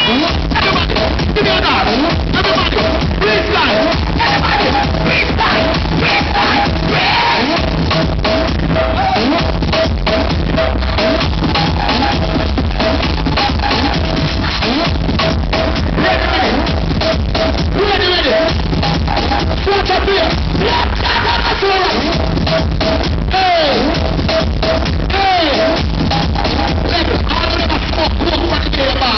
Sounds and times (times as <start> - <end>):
Music: 0.0 - 29.1
Speech: 17.8 - 18.5, 26.9 - 29.1.